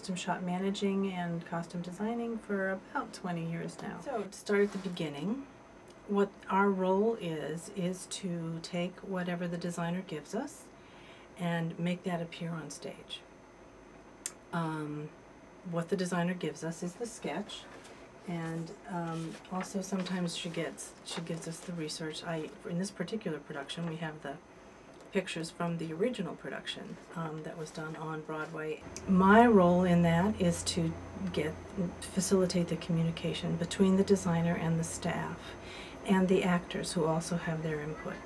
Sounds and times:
Speech: 0.0s - 5.5s, 6.1s - 10.7s, 11.4s - 13.3s, 14.3s - 24.4s, 25.1s - 38.2s.

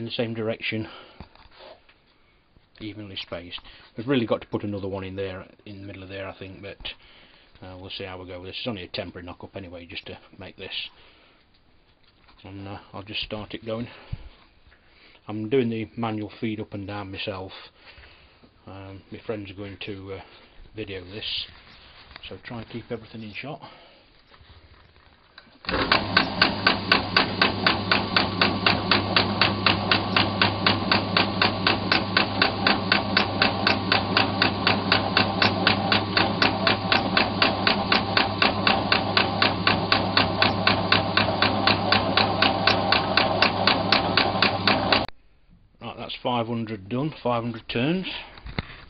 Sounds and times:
Speech: 0.0s - 1.0s, 2.8s - 7.0s, 7.6s - 11.0s, 12.4s - 14.0s, 15.3s - 17.7s, 18.6s - 21.6s, 22.2s - 23.7s, 45.8s - 48.4s.

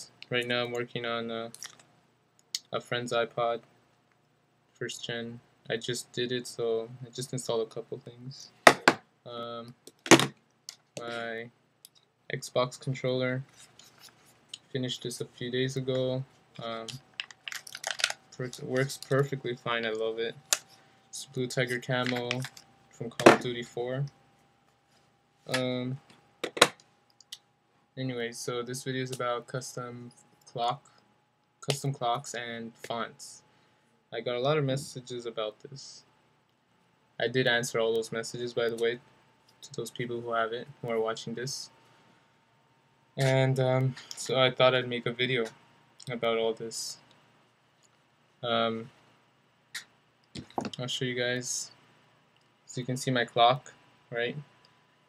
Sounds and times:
Speech: 0.0s - 1.7s, 2.6s - 3.7s, 4.8s - 8.6s, 9.3s - 9.8s, 11.0s - 11.5s, 12.3s - 13.5s, 14.6s - 17.0s, 18.4s - 20.4s, 21.2s - 24.2s, 25.5s - 26.1s, 28.0s - 30.9s, 31.6s - 33.4s, 34.1s - 36.1s, 37.2s - 39.0s, 39.6s - 41.8s, 43.2s - 47.0s, 48.4s - 48.9s, 50.4s - 51.8s, 52.7s - 54.5s.

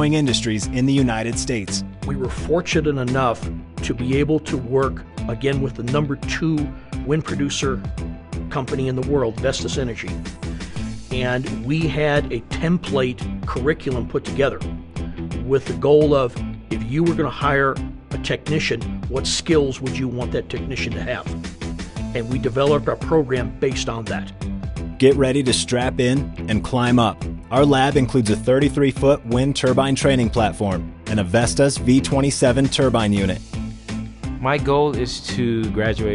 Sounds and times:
Speech: 0.0s - 7.8s, 8.5s - 10.2s, 11.1s - 14.6s, 15.4s - 21.3s, 22.1s - 24.3s, 25.0s - 33.4s, 34.4s - 36.1s
Music: 0.0s - 36.1s.

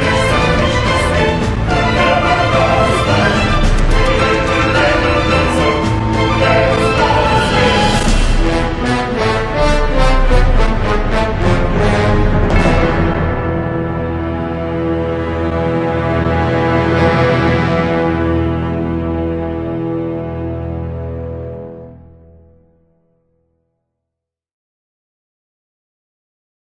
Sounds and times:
Theme music: 0.0s - 22.8s.

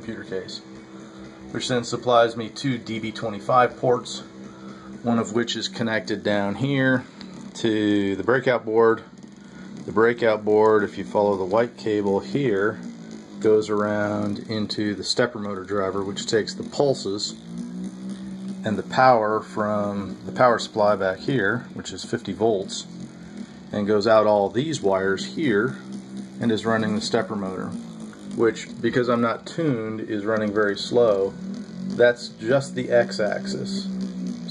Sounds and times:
Speech: 0.0s - 0.6s, 1.5s - 4.3s, 5.0s - 9.1s, 9.8s - 12.8s, 13.4s - 17.4s, 18.6s - 22.9s, 23.7s - 25.8s, 26.4s - 27.8s, 28.4s - 31.4s, 32.0s - 33.9s.

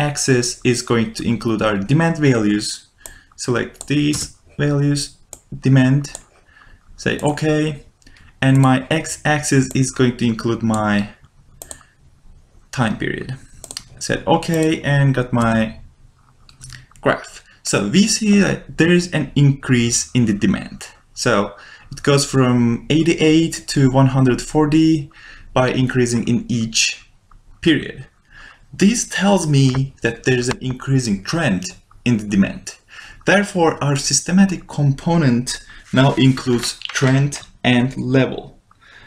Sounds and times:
Speech: 0.0s - 6.2s, 7.0s - 11.2s, 12.8s - 15.8s, 16.6s - 28.1s, 28.7s - 38.6s
Inside, small room: 0.0s - 39.0s
Clicking: 3.0s - 4.2s, 5.3s - 5.5s, 6.1s - 6.3s, 11.5s - 11.9s, 13.6s - 13.9s.

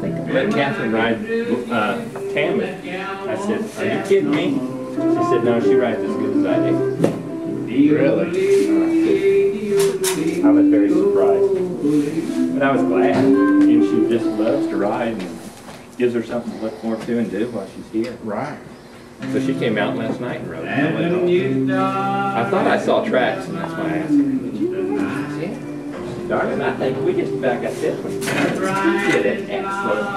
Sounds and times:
Music: 0.0s - 15.6s, 19.2s - 30.1s
Speech: 12.6s - 15.3s, 16.0s - 21.6s, 22.4s - 25.6s, 26.3s - 30.1s.

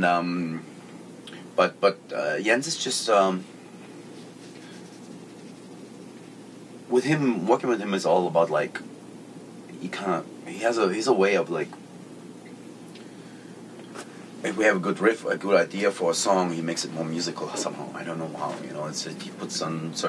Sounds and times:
Speech: 0.0s - 0.7s, 1.6s - 3.5s, 6.9s - 8.9s, 9.8s - 11.8s, 14.4s - 20.0s.

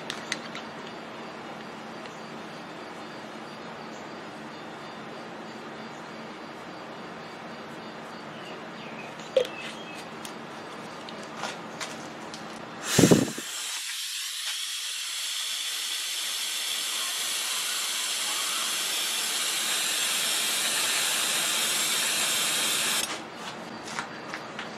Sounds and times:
Hiss: 12.8s - 23.1s.

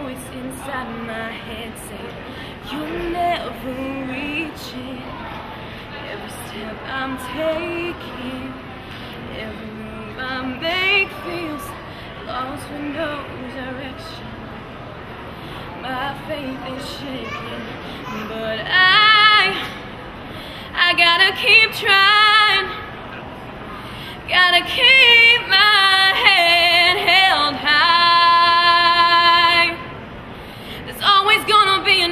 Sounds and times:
Female singing: 0.0s - 5.4s, 6.0s - 14.4s, 15.7s - 19.8s, 20.7s - 22.9s, 24.2s - 29.9s, 30.8s - 32.1s.

